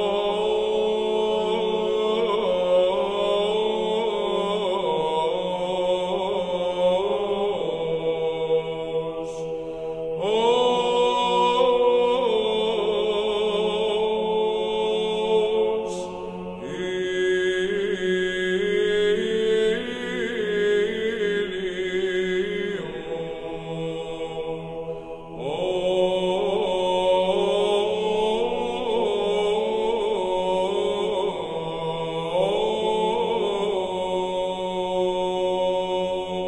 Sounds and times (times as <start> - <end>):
Mantra: 0.0 - 36.4.